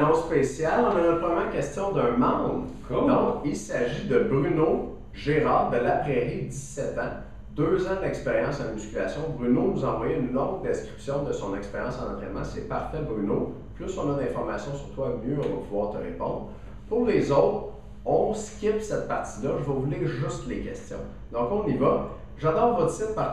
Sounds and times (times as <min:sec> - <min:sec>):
Speech: 0:00.0 - 0:23.3.